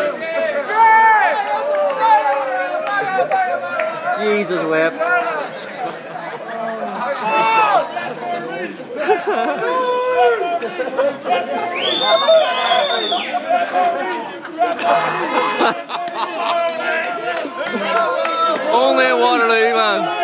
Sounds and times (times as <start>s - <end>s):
Speech: 2.2s - 15.4s, 16.4s - 20.2s.